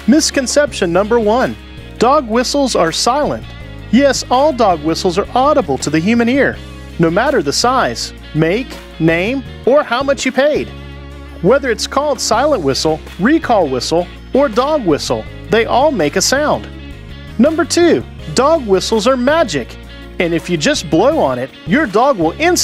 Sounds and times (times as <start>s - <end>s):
Speech: 0.0s - 10.7s, 11.4s - 16.7s, 17.4s - 22.6s
Music: 0.0s - 22.6s.